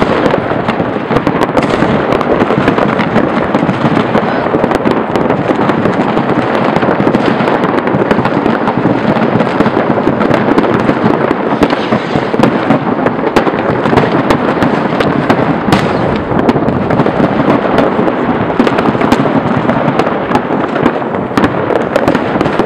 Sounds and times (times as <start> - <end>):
Fireworks: 0.0 - 22.6.